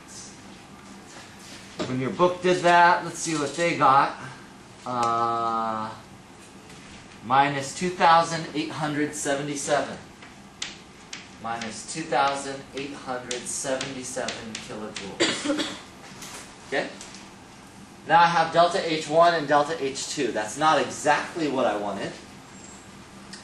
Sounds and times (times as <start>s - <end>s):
Speech: 1.8s - 4.3s, 4.9s - 6.0s, 7.2s - 10.0s, 11.4s - 15.4s, 16.7s - 17.0s, 18.1s - 22.2s.